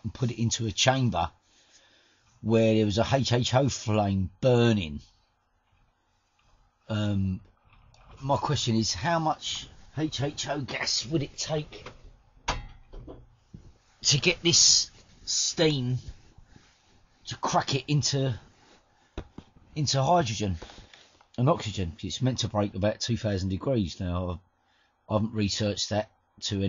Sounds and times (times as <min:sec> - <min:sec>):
Speech: 0:00.0 - 0:01.4, 0:02.4 - 0:05.2, 0:06.9 - 0:07.4, 0:08.1 - 0:11.9, 0:14.0 - 0:16.1, 0:17.3 - 0:18.5, 0:19.8 - 0:20.7, 0:21.4 - 0:24.4, 0:25.1 - 0:26.6.